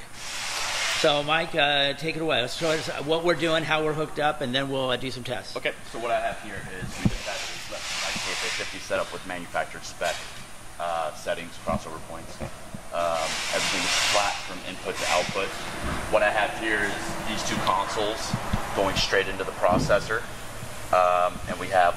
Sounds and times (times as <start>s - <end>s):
Speech: 1.0s - 10.2s, 10.8s - 20.3s, 21.0s - 21.9s.